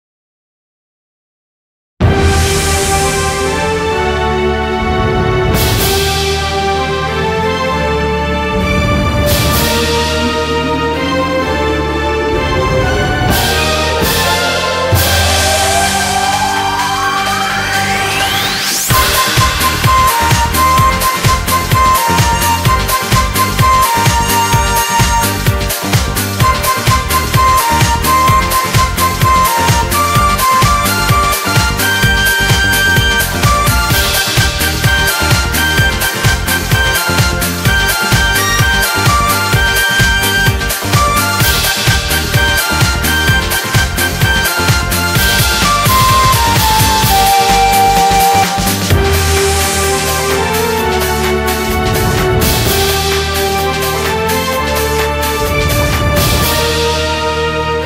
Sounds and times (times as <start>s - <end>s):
Theme music: 2.0s - 57.8s.